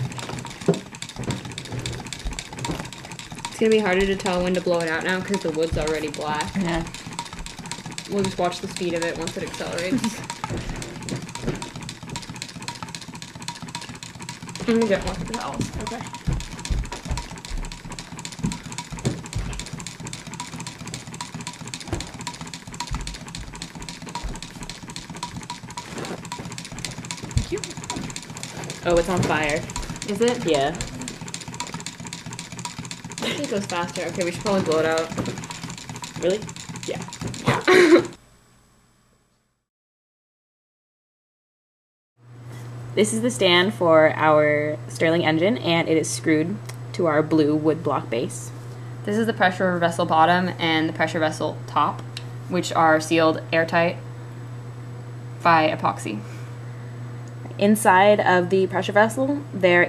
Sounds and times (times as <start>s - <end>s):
Speech: 3.6s - 6.9s, 8.1s - 10.2s, 14.7s - 16.1s, 28.8s - 30.8s, 33.2s - 35.2s, 36.2s - 37.7s, 43.0s - 54.0s, 55.4s - 56.3s, 57.5s - 59.8s.